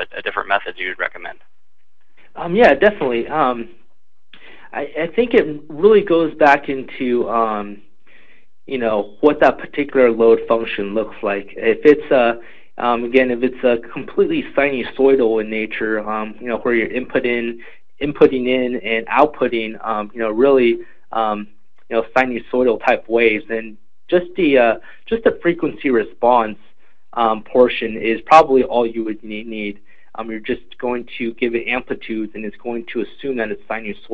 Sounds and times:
Speech: 0.0 - 1.4, 2.3 - 3.7, 4.4 - 7.8, 8.7 - 26.6, 27.2 - 34.1.

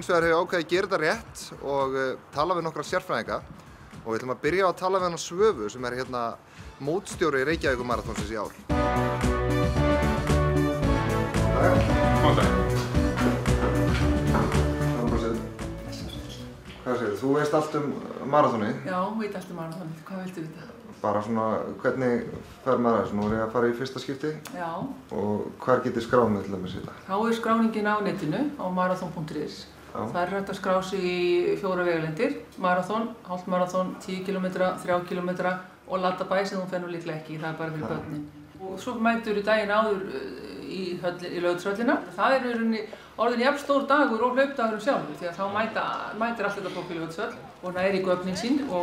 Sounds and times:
Music: 2.4 - 17.8.

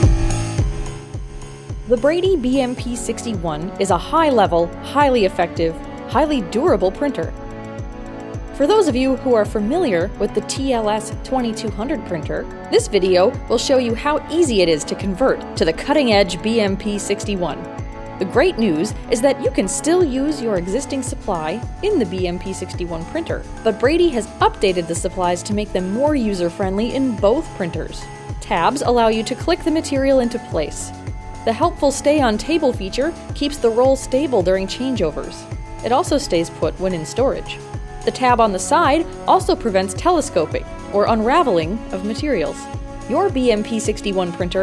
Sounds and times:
Music: 0.0 - 44.6
Speech: 1.9 - 7.3, 8.6 - 30.9, 31.5 - 44.6.

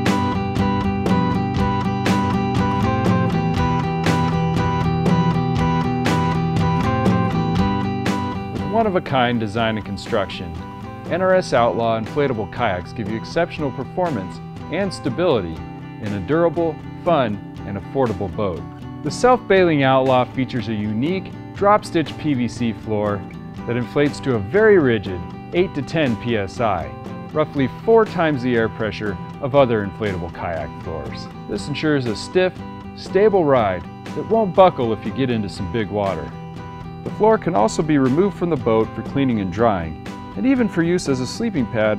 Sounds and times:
Music: 0.0 - 41.9
Speech: 8.6 - 36.3, 37.1 - 41.9.

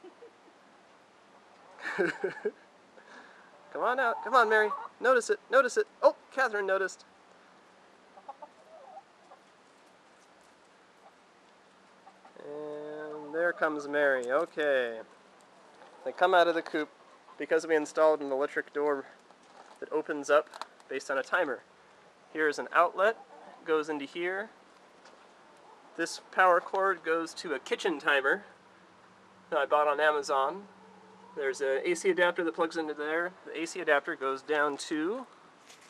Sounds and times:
Chicken, rooster: 3.4 - 5.0, 8.2 - 9.5, 12.0 - 13.8, 23.0 - 23.6, 25.2 - 26.0, 30.7 - 31.5
Speech: 3.7 - 7.1, 12.4 - 15.1, 16.0 - 19.2, 19.8 - 21.6, 22.4 - 24.6, 26.0 - 28.5, 29.5 - 30.7, 31.4 - 35.3.

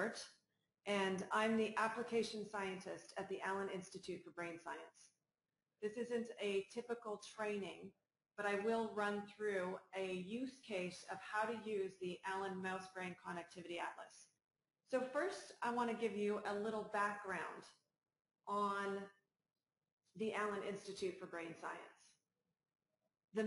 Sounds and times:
Speech: 0.0 - 0.3, 0.9 - 5.0, 5.8 - 14.2, 14.9 - 17.7, 18.5 - 19.0, 20.2 - 21.9.

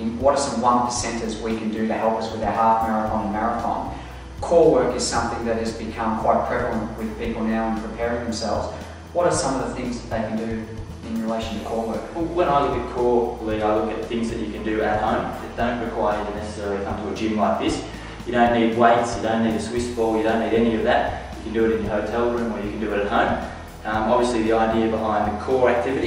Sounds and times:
Music: 0.0 - 26.0
Speech: 0.0 - 26.0.

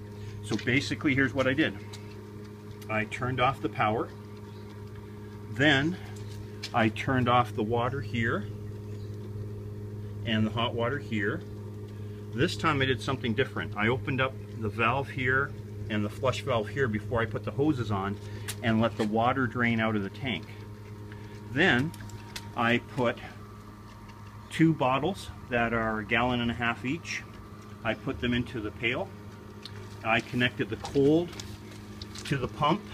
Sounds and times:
Speech: 0.5 - 1.9, 2.9 - 4.1, 5.5 - 6.1, 6.7 - 8.5, 10.2 - 11.5, 12.4 - 20.6, 21.5 - 22.0, 22.6 - 23.4, 24.5 - 29.1, 30.0 - 31.4, 32.2 - 32.9.

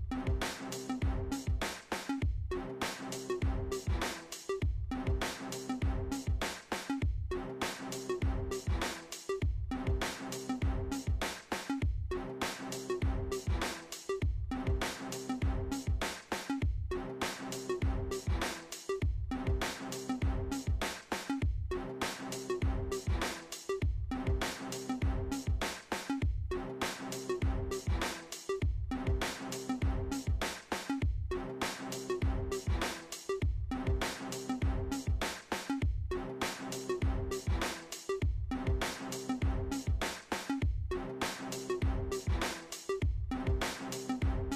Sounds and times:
Music: 0.0 - 44.5.

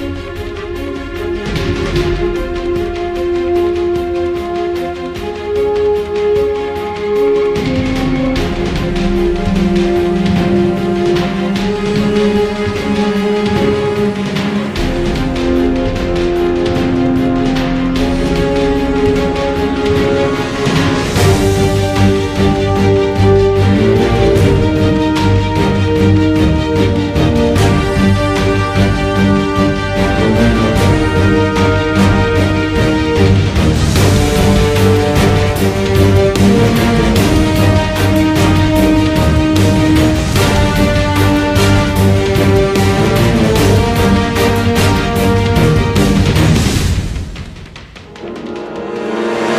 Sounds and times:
Theme music: 0.0 - 49.5.

